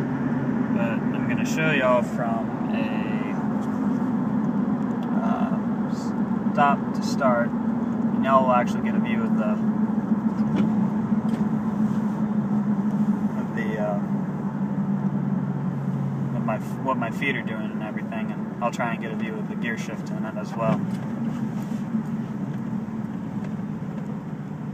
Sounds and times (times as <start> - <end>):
Car: 0.0 - 24.7
Speech: 0.8 - 3.4, 5.1 - 7.5, 8.2 - 9.6, 13.4 - 14.1, 16.4 - 20.8.